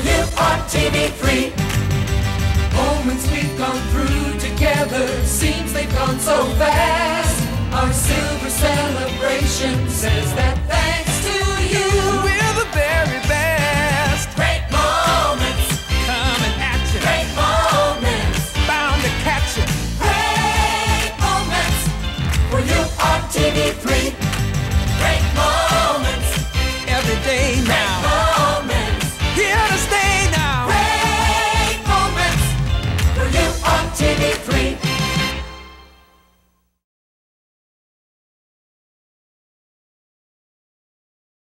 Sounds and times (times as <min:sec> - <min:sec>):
Pop music: 0:00.0 - 0:35.8.